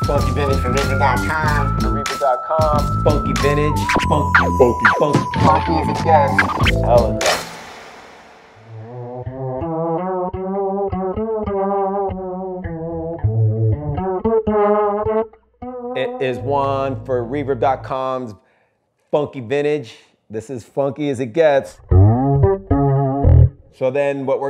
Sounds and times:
Bass guitar: 0:00.0 - 0:02.1, 0:02.7 - 0:07.4, 0:08.7 - 0:18.0, 0:21.7 - 0:23.8
Speech: 0:00.0 - 0:07.2, 0:16.0 - 0:18.4, 0:19.2 - 0:21.8, 0:23.8 - 0:24.5
Chorus effect: 0:08.7 - 0:17.7, 0:21.8 - 0:23.7.

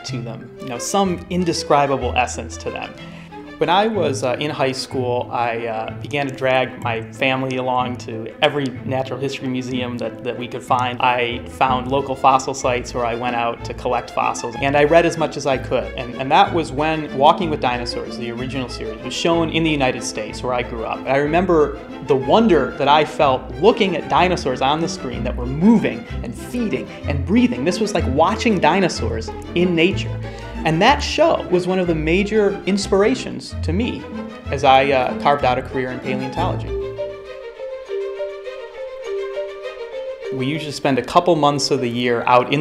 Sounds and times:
Speech: 0:00.0 - 0:03.0, 0:03.6 - 0:36.8, 0:40.3 - 0:42.6.

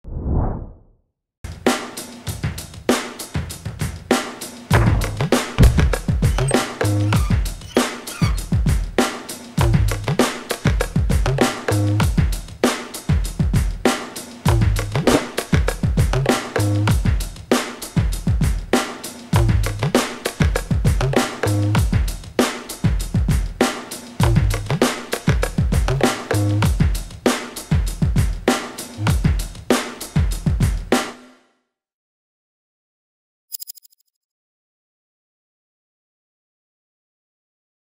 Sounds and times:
Music: 0:01.5 - 0:31.7.

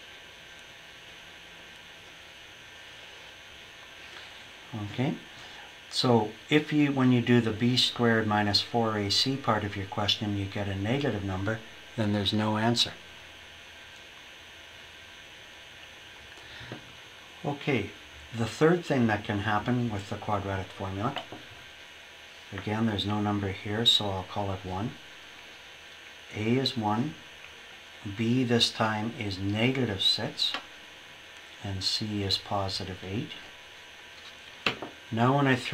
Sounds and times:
Inside, small room: 0:00.0 - 0:35.7
Speech: 0:04.7 - 0:05.3, 0:05.9 - 0:13.1, 0:17.4 - 0:21.4, 0:22.5 - 0:25.0, 0:26.3 - 0:27.3, 0:28.0 - 0:30.7, 0:31.6 - 0:33.5, 0:35.1 - 0:35.7.

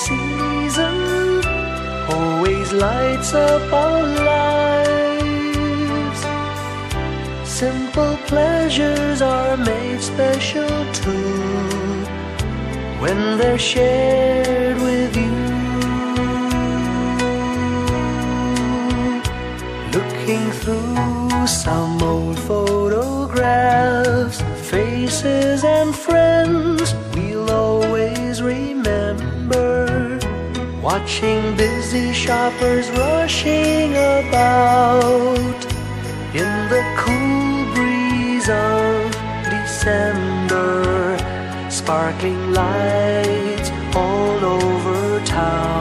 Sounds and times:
Christian music: 0:00.0 - 0:45.8
Christmas music: 0:00.0 - 0:45.8.

